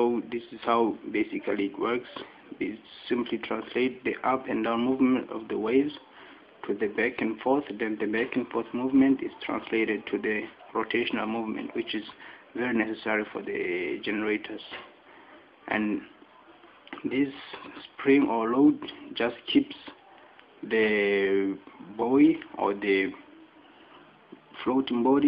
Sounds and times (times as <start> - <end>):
Speech: 0.0 - 25.2.